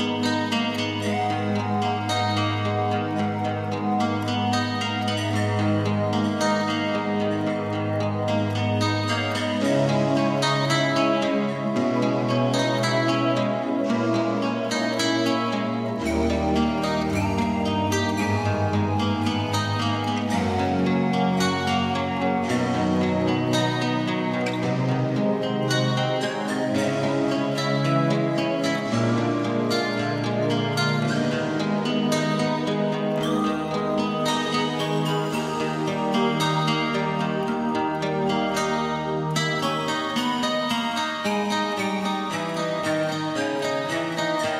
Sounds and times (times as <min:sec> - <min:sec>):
Music: 0:00.0 - 0:44.5.